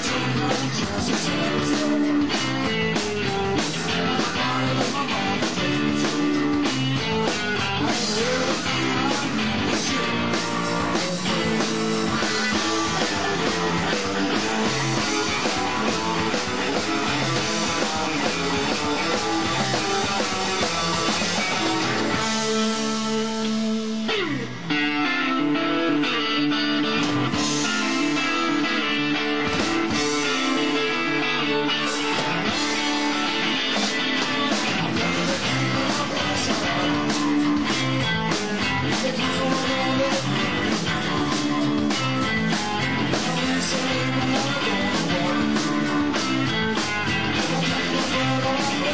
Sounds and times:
Music: 0:00.0 - 0:48.9.

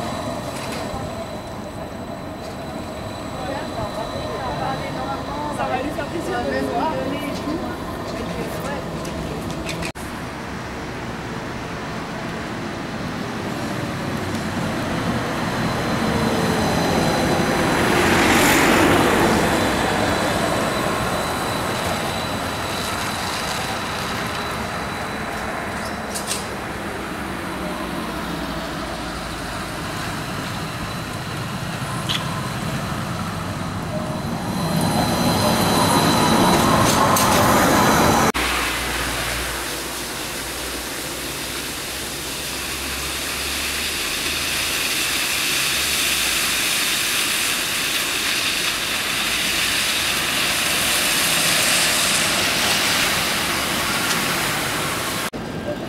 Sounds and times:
Bus: 0:00.0 - 0:55.8.

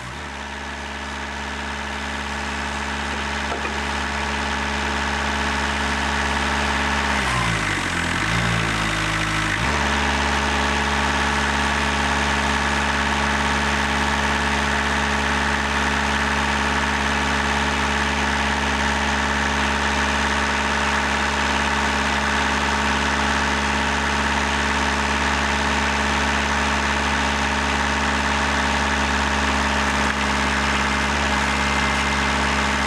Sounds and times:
Truck: 0:00.0 - 0:32.8.

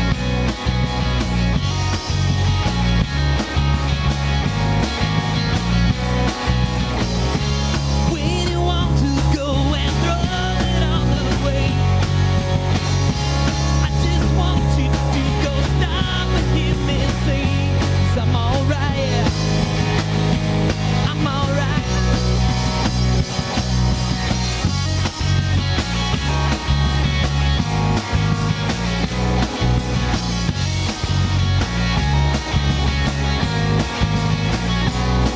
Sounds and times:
Ska: 0:00.0 - 0:35.3.

